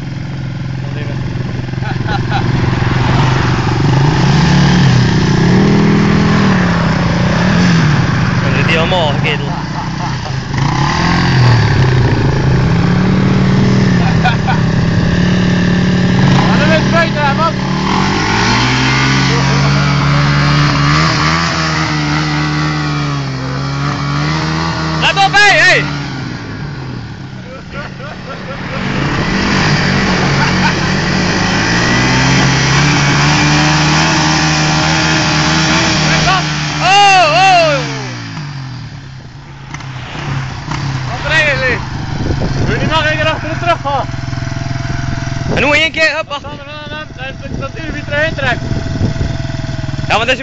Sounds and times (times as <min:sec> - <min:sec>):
Vehicle: 0:00.0 - 0:50.4.